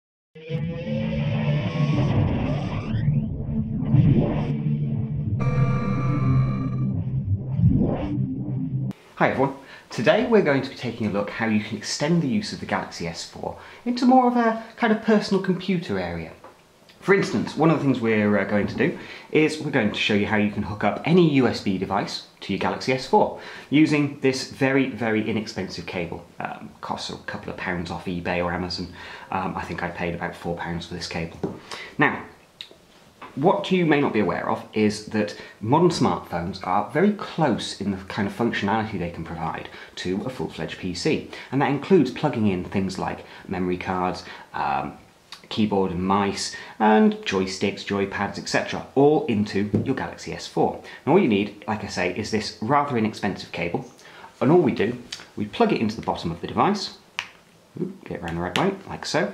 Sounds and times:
Music: 0.4s - 8.9s
Inside, small room: 0.4s - 59.3s
Speech: 9.2s - 16.4s, 17.0s - 32.4s, 33.3s - 57.0s, 57.8s - 59.3s.

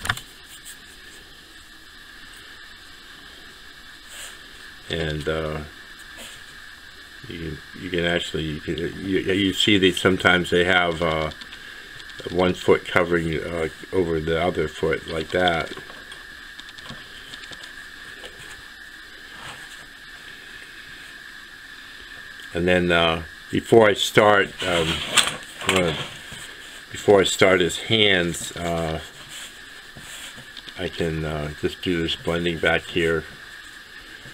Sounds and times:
Speech: 4.9s - 5.7s, 7.3s - 11.4s, 12.2s - 15.8s, 22.5s - 26.1s, 27.0s - 29.1s, 30.8s - 33.3s.

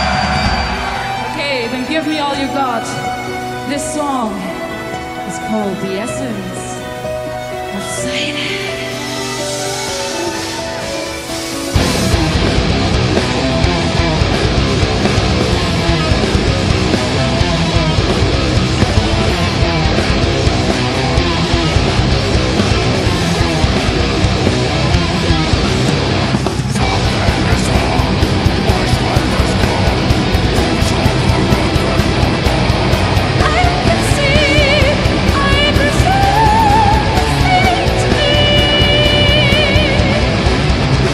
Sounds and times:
Music: 0.0s - 41.1s.

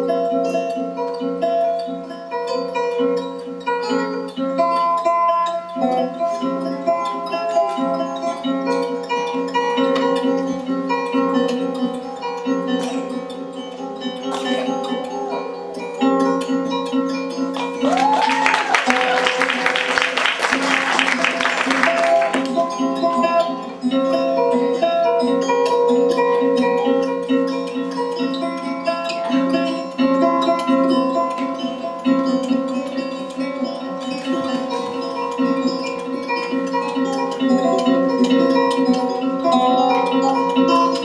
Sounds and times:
Music: 0.0s - 41.0s.

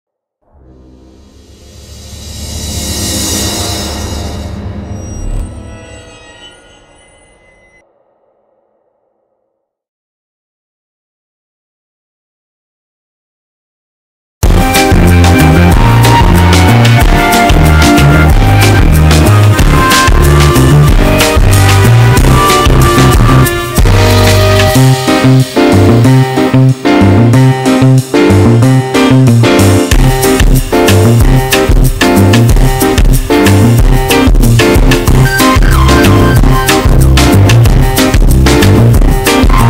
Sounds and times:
Music: 0.4s - 7.9s, 14.4s - 39.6s.

